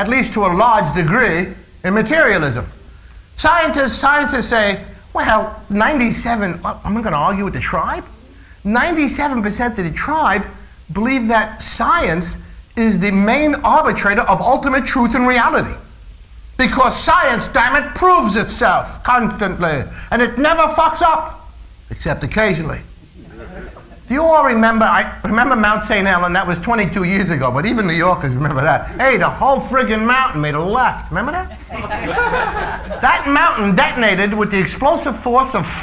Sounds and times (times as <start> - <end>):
Speech: 0.0 - 2.8, 3.4 - 15.8, 16.6 - 31.6, 33.0 - 35.8.